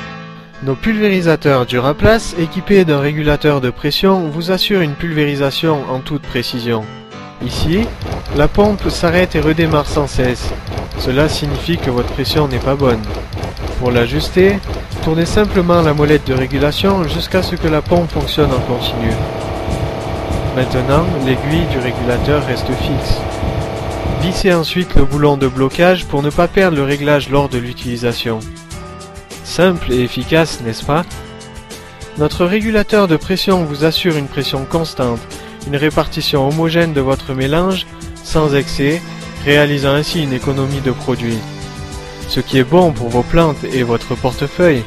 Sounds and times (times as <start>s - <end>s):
Music: 0.0s - 44.8s
Speech: 0.6s - 13.1s, 13.8s - 19.3s, 20.5s - 23.2s, 24.2s - 28.5s, 29.4s - 31.2s, 32.2s - 41.5s, 42.3s - 44.8s.